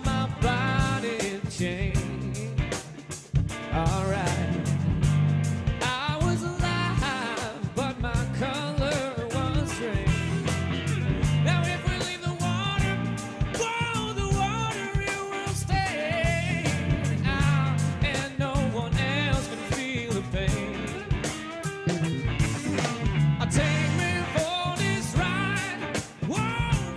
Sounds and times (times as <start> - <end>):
Funk: 0.0 - 26.9
Jazz: 0.0 - 26.9
Pop music: 0.0 - 26.9.